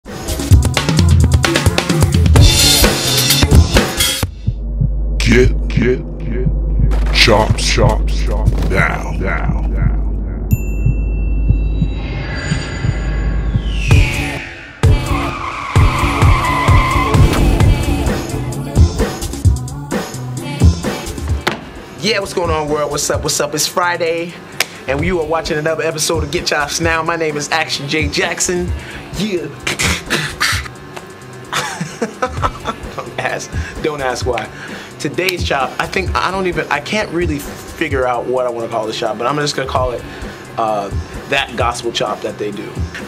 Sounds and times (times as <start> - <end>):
Drum kit: 0.1 - 12.0, 12.8 - 23.4, 28.0 - 43.0
Bass drum: 0.5 - 15.2.